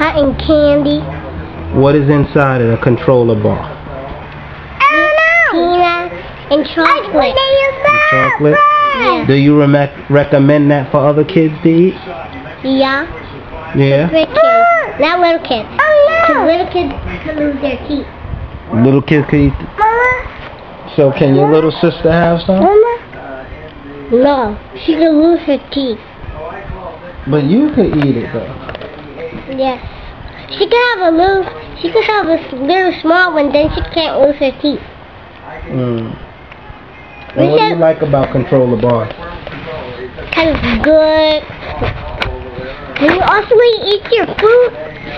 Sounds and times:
Child speech, kid speaking: 0:00.0 - 0:01.2, 0:04.8 - 0:09.3, 0:12.6 - 0:13.2, 0:14.1 - 0:18.2, 0:19.8 - 0:20.4, 0:24.1 - 0:26.0, 0:29.5 - 0:29.9, 0:30.5 - 0:34.9, 0:37.4 - 0:38.6, 0:40.3 - 0:41.5, 0:43.0 - 0:45.1.

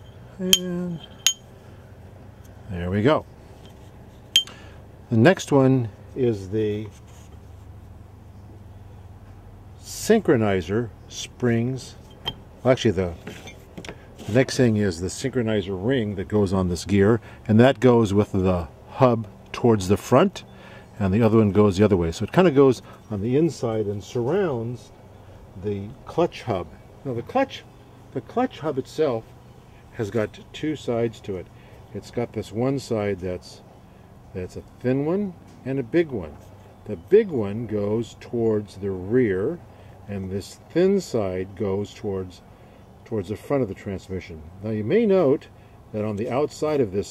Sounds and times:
Speech: 0:00.4 - 0:01.0, 0:02.7 - 0:03.3, 0:05.1 - 0:07.0, 0:09.8 - 0:12.0, 0:12.6 - 0:13.3, 0:14.2 - 0:25.0, 0:25.6 - 0:29.3, 0:29.9 - 0:33.6, 0:34.3 - 0:42.4, 0:43.0 - 0:47.1.

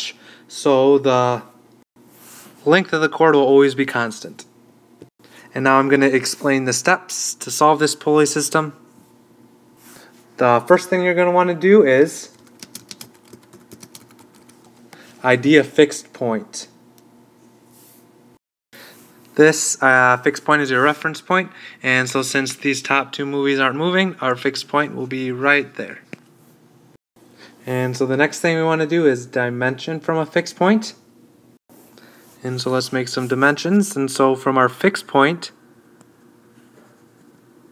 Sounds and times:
Speech: 0:00.0 - 0:01.6, 0:02.6 - 0:04.5, 0:05.5 - 0:08.8, 0:10.4 - 0:12.4, 0:15.2 - 0:16.8, 0:19.4 - 0:26.1, 0:27.6 - 0:31.0, 0:32.4 - 0:35.6
Computer keyboard: 0:12.3 - 0:14.9.

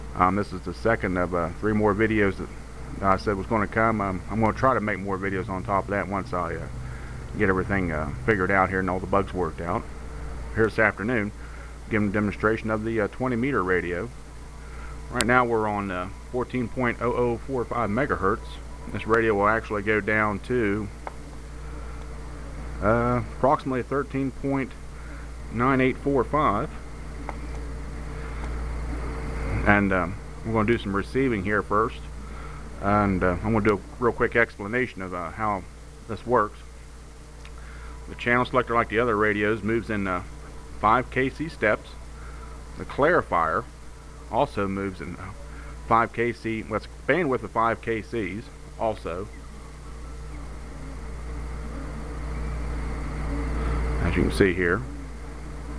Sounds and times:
Speech: 0:00.0 - 0:06.7, 0:07.4 - 0:09.9, 0:10.6 - 0:14.2, 0:15.1 - 0:21.0, 0:22.8 - 0:24.8, 0:25.5 - 0:26.8, 0:29.5 - 0:32.1, 0:32.8 - 0:36.7, 0:38.1 - 0:42.0, 0:42.8 - 0:43.7, 0:44.3 - 0:49.4, 0:53.4 - 0:55.1.

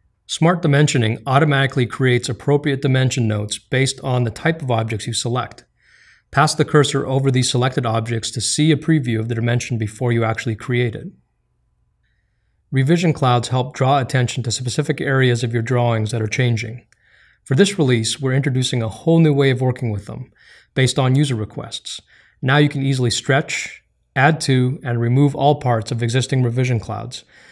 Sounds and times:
Speech: 0:00.3 - 0:05.7, 0:06.3 - 0:11.2, 0:12.7 - 0:27.3.

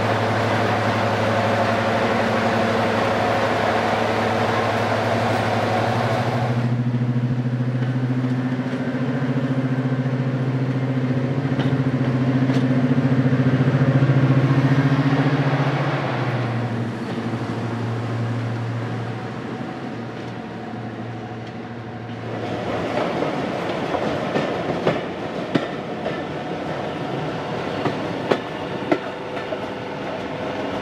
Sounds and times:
Vehicle: 0:00.0 - 0:25.0
Heavy engine (low frequency): 0:00.0 - 0:30.8.

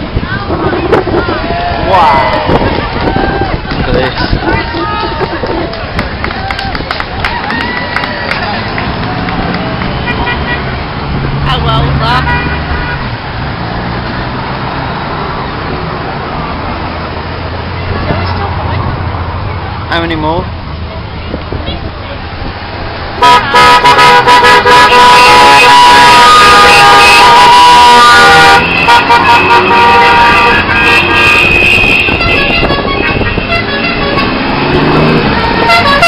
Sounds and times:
Vehicle horn, car horn, honking: 0:10.0 - 0:10.6, 0:12.2 - 0:13.1, 0:23.2 - 0:36.0.

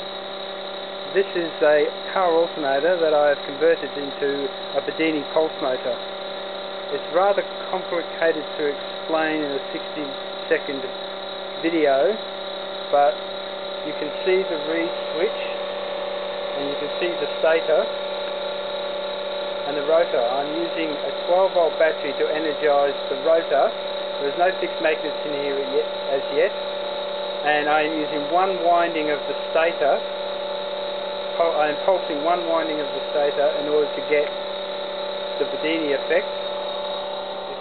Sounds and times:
Speech: 0:01.1 - 0:06.0, 0:06.9 - 0:10.9, 0:11.6 - 0:12.2, 0:13.0 - 0:13.2, 0:13.8 - 0:15.6, 0:16.6 - 0:17.9, 0:19.7 - 0:26.6, 0:27.4 - 0:30.1, 0:31.4 - 0:34.3, 0:35.4 - 0:36.3.

